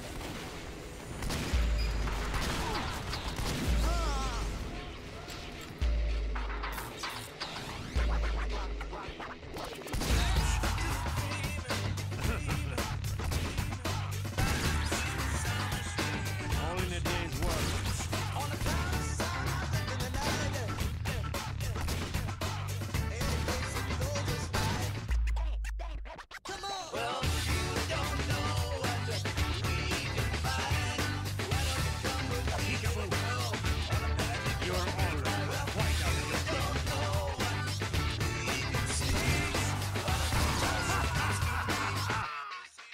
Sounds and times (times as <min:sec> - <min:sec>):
Music: 0:00.8 - 0:42.9
Speech: 0:03.8 - 0:04.6, 0:10.2 - 0:14.2, 0:15.2 - 0:18.8, 0:32.5 - 0:33.6.